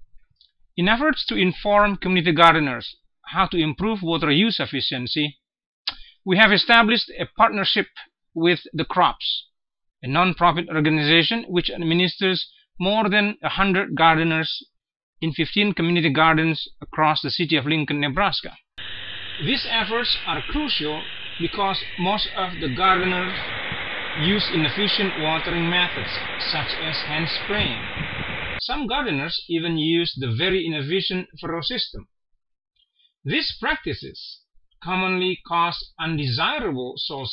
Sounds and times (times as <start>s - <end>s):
Speech: 0.8s - 14.6s, 15.2s - 18.6s, 19.4s - 23.5s, 24.2s - 27.8s, 28.6s - 32.0s, 33.3s - 37.3s.